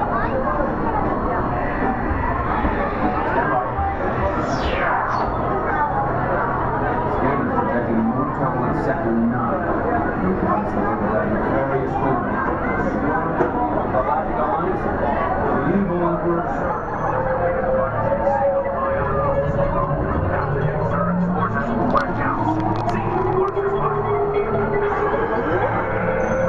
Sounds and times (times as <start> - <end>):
Speech: 0.0 - 26.4.